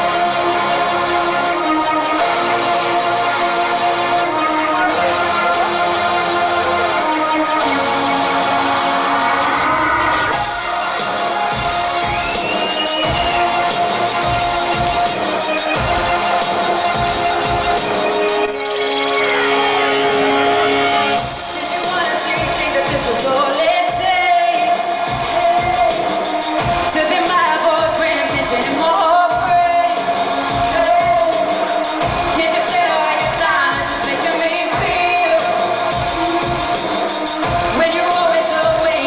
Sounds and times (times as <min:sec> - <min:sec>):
Music: 0:00.0 - 0:39.0.